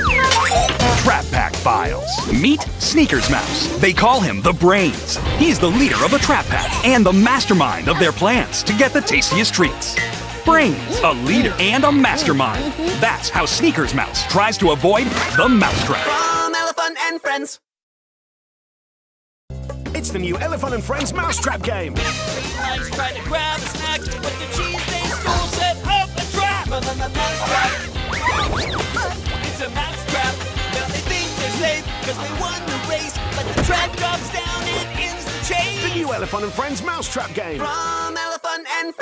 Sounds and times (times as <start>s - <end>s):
Music: 0.0s - 16.8s, 19.5s - 39.0s.